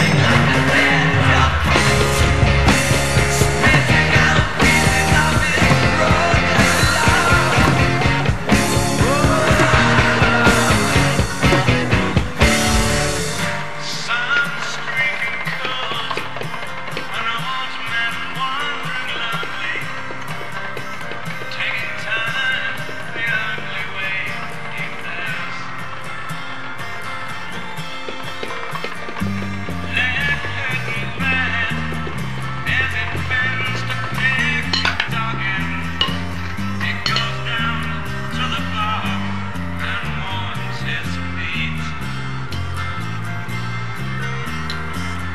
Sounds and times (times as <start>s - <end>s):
Grunge: 0.0s - 45.3s.